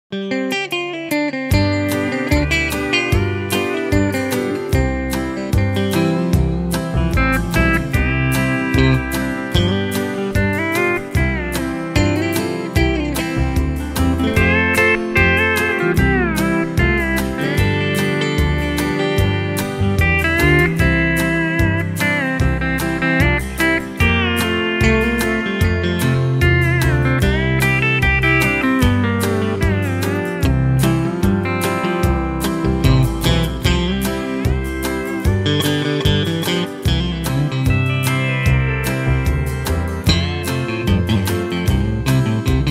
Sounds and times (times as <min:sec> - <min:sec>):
Guitar: 0:00.0 - 0:42.7.